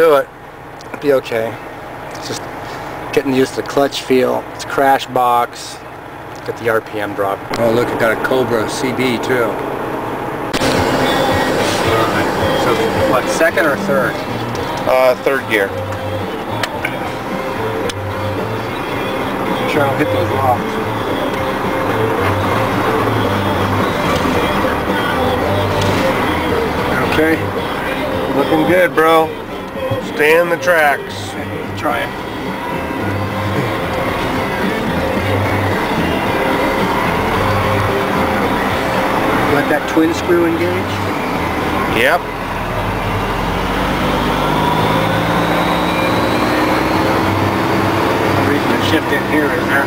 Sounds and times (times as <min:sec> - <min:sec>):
Speech: 0:00.0 - 0:00.3, 0:00.9 - 0:01.6, 0:03.1 - 0:05.8, 0:06.5 - 0:09.6, 0:11.7 - 0:14.2, 0:14.9 - 0:15.8, 0:19.6 - 0:20.6, 0:26.9 - 0:27.5, 0:28.4 - 0:29.3, 0:29.9 - 0:32.1, 0:39.5 - 0:41.0, 0:41.9 - 0:42.2, 0:48.4 - 0:49.8
Vehicle: 0:00.0 - 0:49.8
Music: 0:10.6 - 0:49.8.